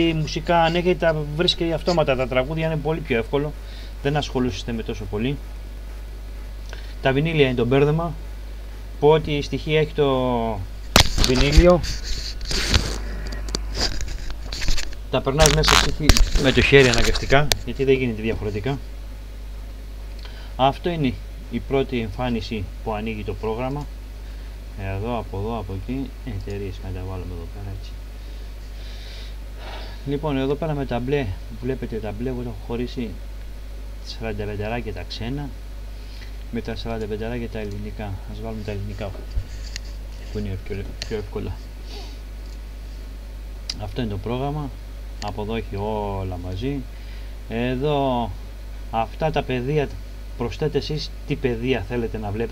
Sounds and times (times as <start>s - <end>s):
Speech: 0.0s - 5.4s, 7.0s - 8.2s, 9.0s - 11.8s, 15.1s - 18.8s, 20.6s - 23.9s, 24.8s - 28.0s, 30.0s - 33.2s, 34.0s - 35.6s, 36.5s - 39.2s, 40.3s - 41.6s, 43.7s - 46.9s, 47.5s - 52.5s.